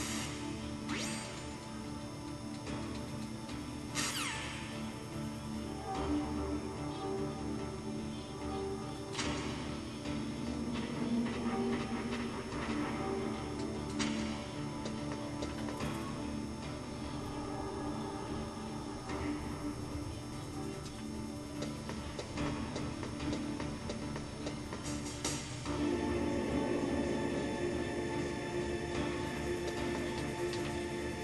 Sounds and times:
Music: 0.0 - 31.2.

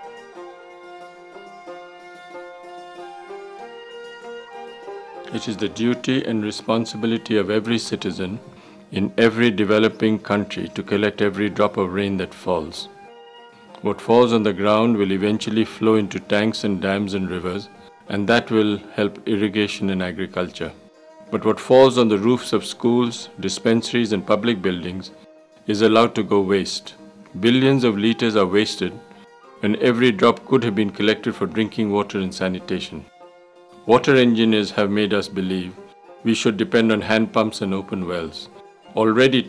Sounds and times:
Music: 0.0 - 39.4
Speech: 5.3 - 12.9, 13.8 - 20.8, 21.4 - 29.0, 29.6 - 33.1, 33.9 - 39.4.

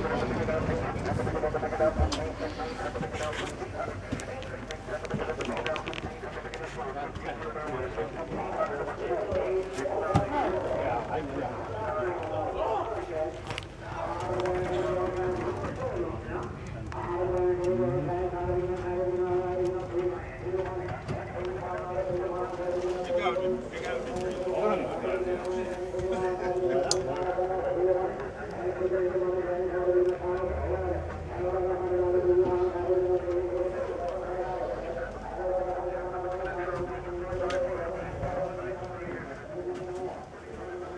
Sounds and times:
Speech: 0.0 - 40.9.

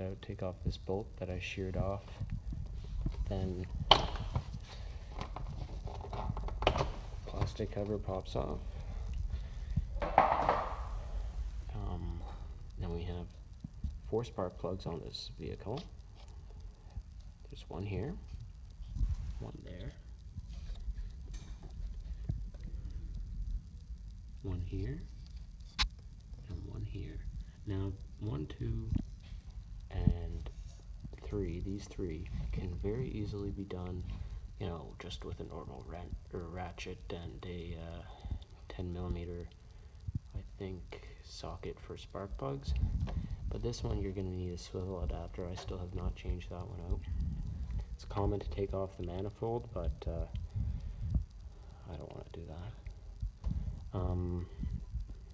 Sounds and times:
Speech: 0.0 - 2.2, 3.2 - 3.7, 7.3 - 8.7, 11.7 - 13.4, 14.0 - 15.9, 17.5 - 18.2, 19.4 - 20.1, 24.4 - 25.1, 26.4 - 29.1, 29.9 - 30.6, 31.2 - 39.6, 40.3 - 42.8, 43.5 - 47.1, 48.0 - 50.4, 51.8 - 52.8, 53.9 - 54.6.

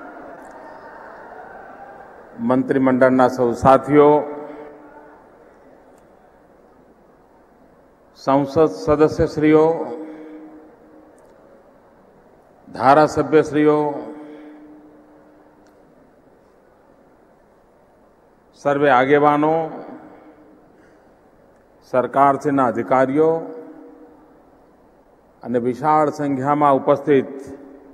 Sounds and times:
Male speech, man speaking: 2.4 - 4.4, 8.2 - 10.1, 12.7 - 14.2, 18.6 - 20.0, 21.9 - 23.6, 25.4 - 27.6
Narration, monologue: 2.4 - 27.9.

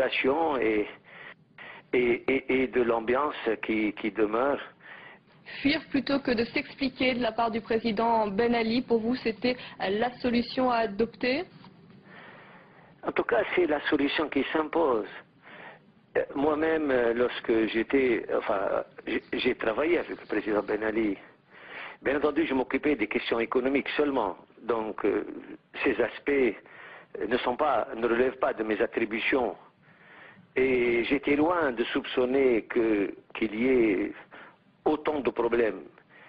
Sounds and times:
Speech: 0.0 - 1.0, 2.0 - 4.7, 5.6 - 11.5, 13.0 - 15.3, 16.2 - 21.3, 22.0 - 26.6, 27.2 - 29.6, 30.6 - 35.9.

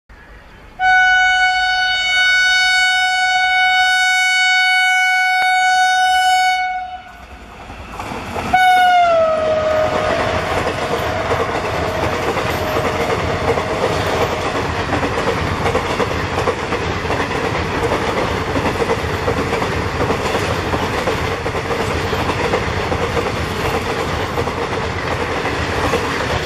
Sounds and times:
Railroad car, train wagon: 0.1 - 26.4
Subway, metro, underground: 0.1 - 26.4
Train: 0.1 - 26.4.

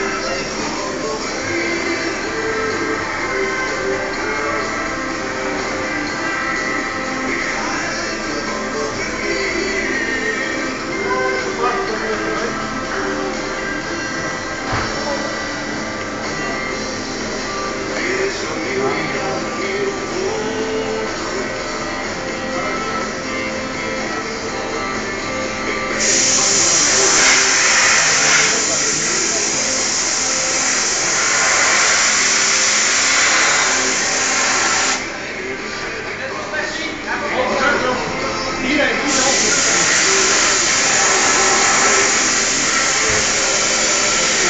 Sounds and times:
Inside, large room or hall: 0.0 - 44.4
Music: 0.0 - 44.4.

